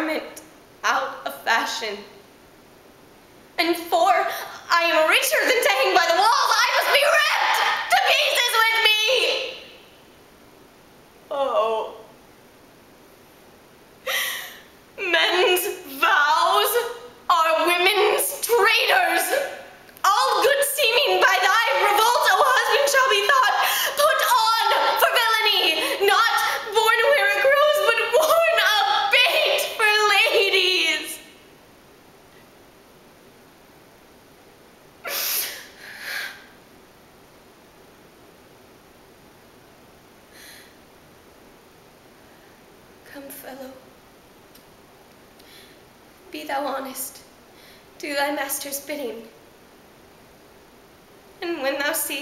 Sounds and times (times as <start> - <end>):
Silence: 9.6 - 11.3, 12.0 - 15.0, 31.2 - 43.1.